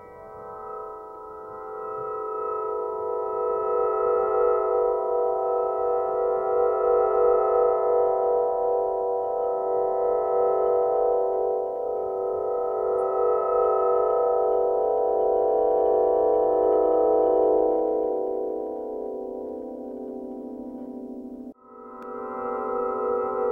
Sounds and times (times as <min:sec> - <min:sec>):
Music: 0:00.0 - 0:23.5.